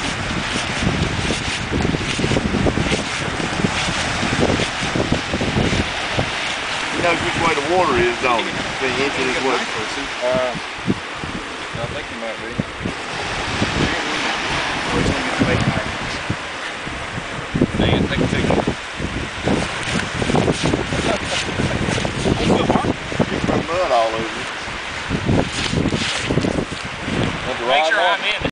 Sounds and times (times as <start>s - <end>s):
Speech: 6.9s - 10.6s, 11.8s - 12.6s, 13.8s - 16.2s, 17.8s - 18.6s, 22.4s - 24.5s, 27.4s - 28.5s.